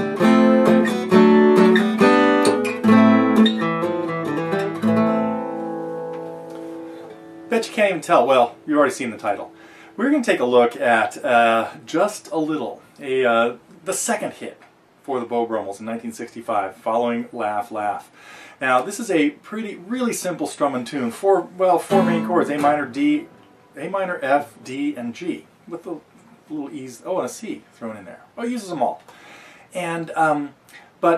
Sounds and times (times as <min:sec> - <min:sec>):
Strum: 0:00.0 - 0:12.5, 0:21.7 - 0:24.8
Acoustic guitar: 0:00.0 - 0:13.0, 0:21.1 - 0:25.0
Speech: 0:07.5 - 0:29.0, 0:29.7 - 0:31.1.